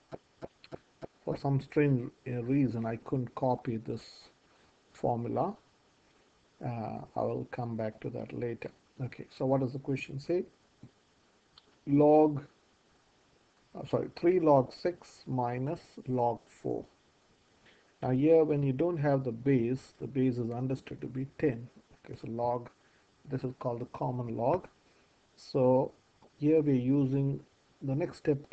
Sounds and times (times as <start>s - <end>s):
Speech: 0.1s - 4.4s, 5.0s - 5.6s, 6.6s - 10.5s, 11.8s - 12.5s, 13.8s - 16.9s, 18.0s - 24.8s, 25.4s - 28.5s.